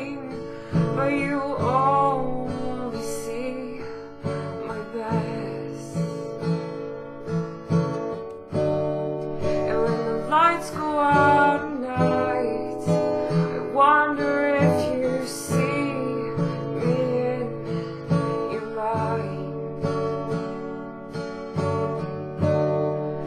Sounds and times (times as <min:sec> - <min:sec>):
Acoustic guitar: 0:00.0 - 0:23.2.